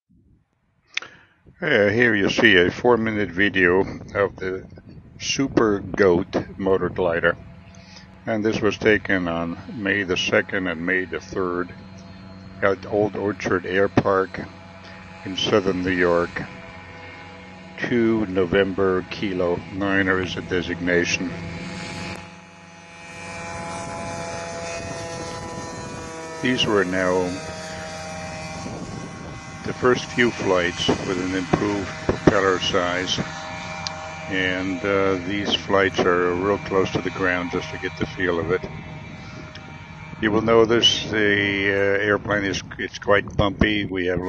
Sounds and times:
Speech: 1.0 - 11.8, 12.6 - 14.5, 15.2 - 16.6, 17.8 - 21.4, 26.4 - 27.6, 29.6 - 33.3, 34.2 - 38.7, 40.2 - 44.2.

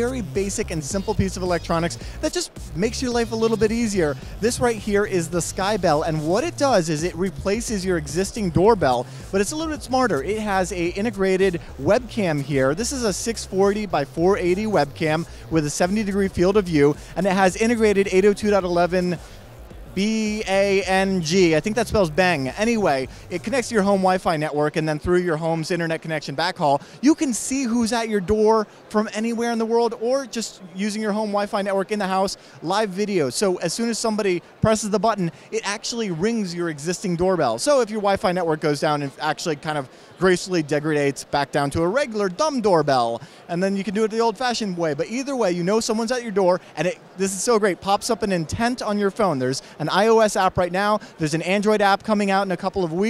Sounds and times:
Speech: 0.0 - 19.2, 19.9 - 53.1.

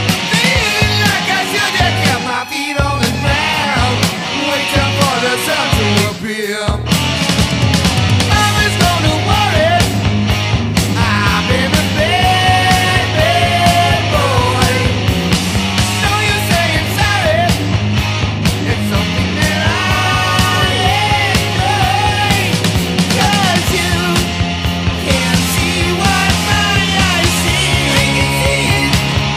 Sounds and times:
Music: 0.0 - 29.3.

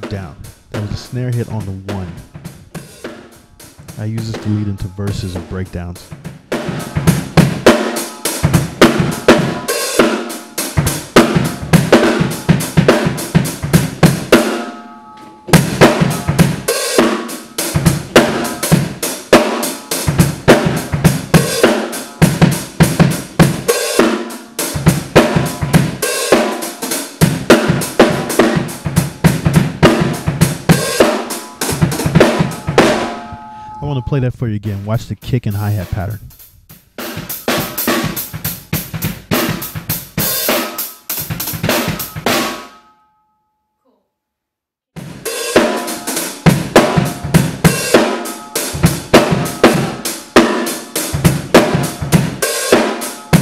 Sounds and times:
Bass drum: 0.0 - 7.8, 15.6 - 16.7, 20.1 - 21.6, 27.2 - 40.4
Snare drum: 0.0 - 14.6, 15.6 - 33.4, 34.7 - 42.7, 45.0 - 53.4
Drum kit: 0.0 - 42.8, 45.0 - 53.4.

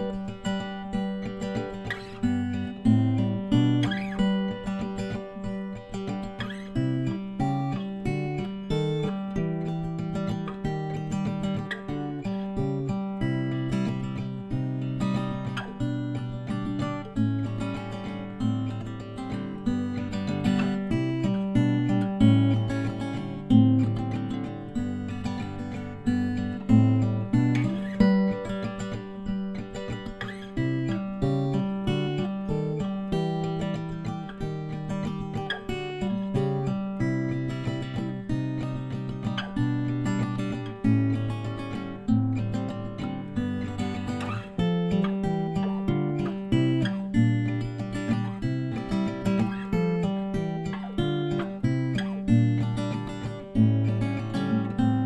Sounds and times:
Acoustic guitar: 0.0 - 55.0.

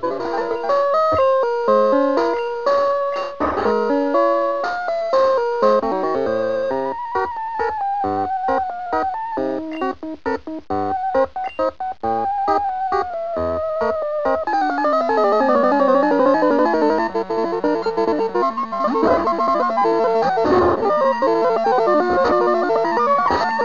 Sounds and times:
Music: 0.0 - 23.6.

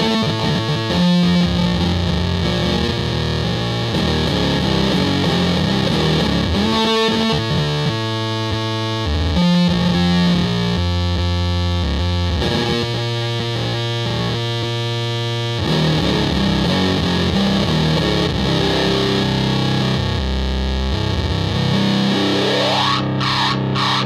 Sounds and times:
Electric guitar: 0.0 - 24.0.

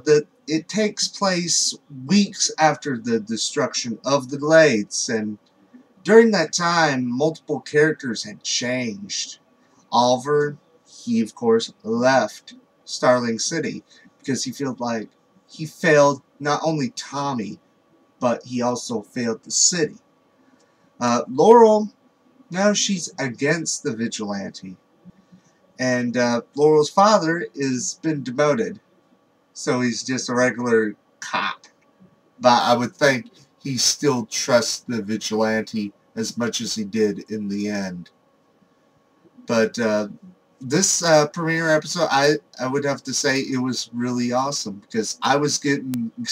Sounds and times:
Speech: 0.0 - 5.4, 6.0 - 17.6, 18.2 - 20.0, 21.0 - 24.8, 25.8 - 28.9, 29.6 - 31.7, 32.4 - 38.1, 39.4 - 46.3.

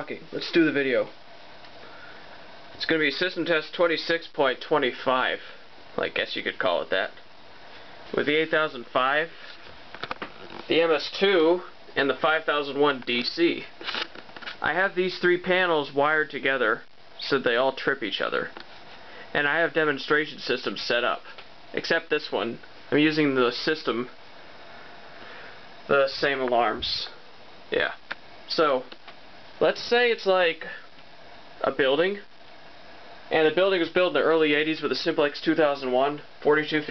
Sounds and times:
Speech: 0.0 - 1.2, 2.8 - 7.2, 8.1 - 9.4, 10.7 - 13.8, 14.6 - 18.6, 19.3 - 24.2, 25.9 - 29.0, 29.6 - 30.9, 31.6 - 32.3, 33.3 - 36.9.

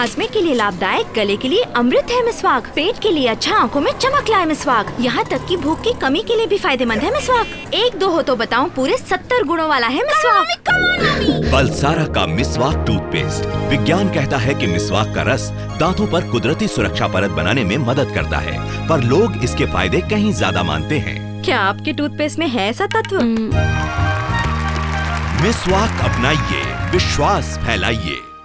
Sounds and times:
Music: 10.7 - 28.4
Speech: 25.4 - 28.3.

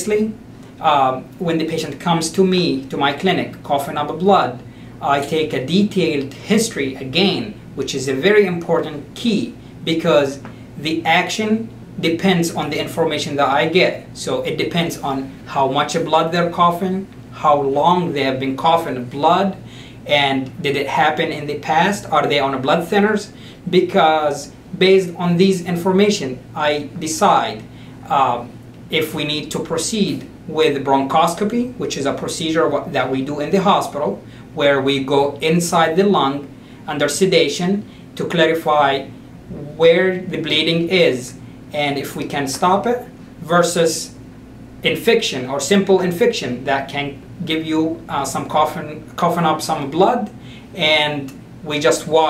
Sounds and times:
Speech: 0.0 - 44.2, 44.8 - 52.3.

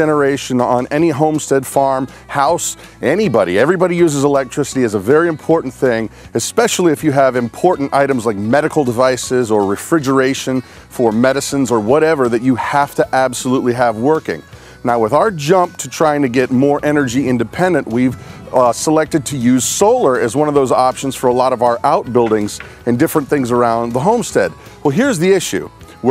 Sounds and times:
Music: 0.0 - 26.1
Speech: 0.0 - 26.1.

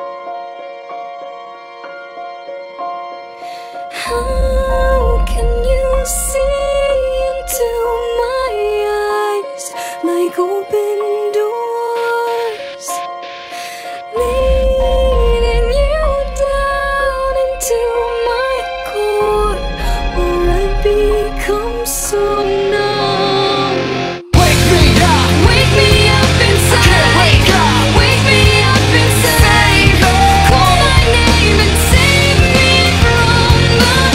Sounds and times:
Music: 0.0 - 34.1.

